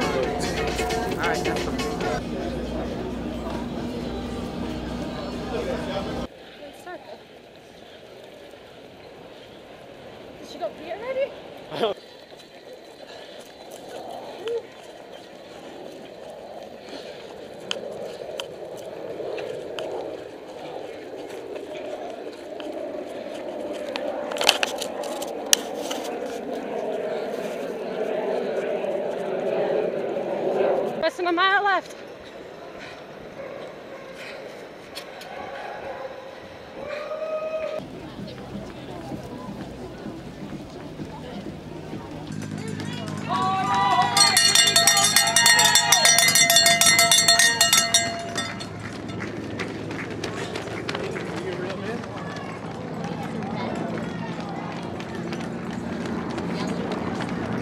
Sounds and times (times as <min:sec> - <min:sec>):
Music: 0:00.0 - 0:02.2
Outside, urban or manmade: 0:00.0 - 0:57.6.